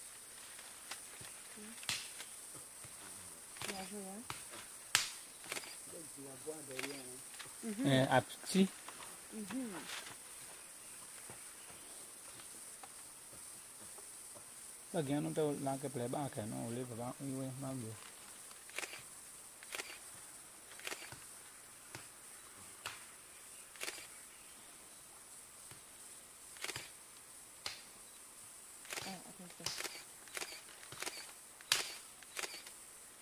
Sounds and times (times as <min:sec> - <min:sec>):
Speech: 0:06.0 - 0:08.7, 0:15.0 - 0:18.0.